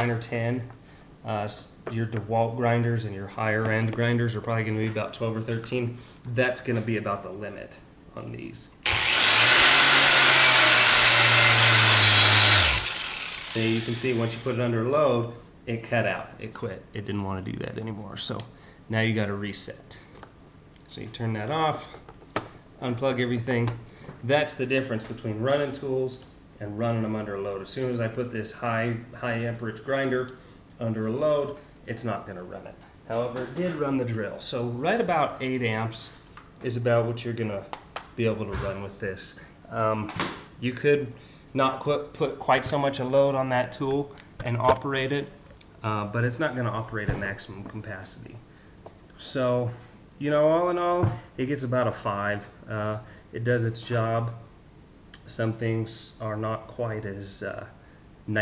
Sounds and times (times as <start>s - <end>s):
Power tool: 8.8s - 14.6s.